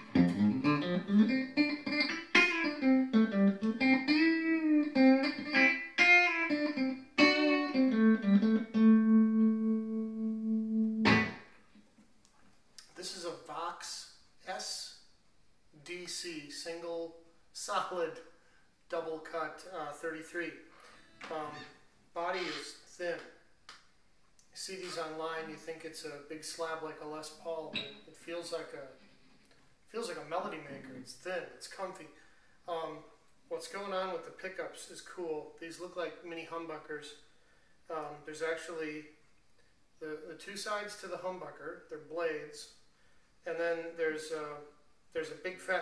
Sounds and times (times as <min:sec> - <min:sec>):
Strum: 0:07.2 - 0:11.5.